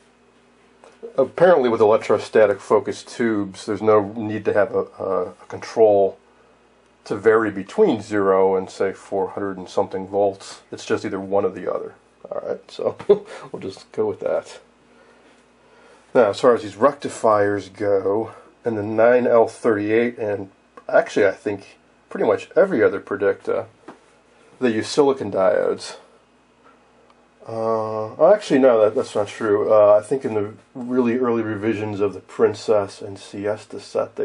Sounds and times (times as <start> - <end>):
Inside, small room: 0.0 - 34.2
Speech: 0.9 - 6.2, 7.0 - 14.7, 16.1 - 23.8, 24.6 - 26.2, 27.4 - 34.2.